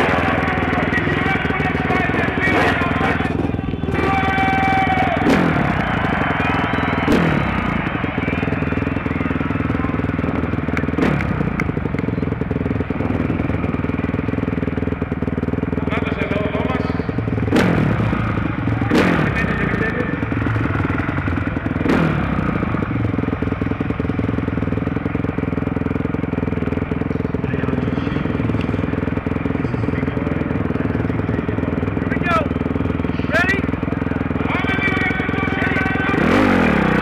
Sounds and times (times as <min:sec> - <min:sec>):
Speech: 0:00.0 - 0:05.0, 0:15.8 - 0:17.1, 0:18.8 - 0:20.2, 0:27.3 - 0:28.5, 0:29.5 - 0:32.5, 0:33.2 - 0:33.7, 0:34.4 - 0:36.4.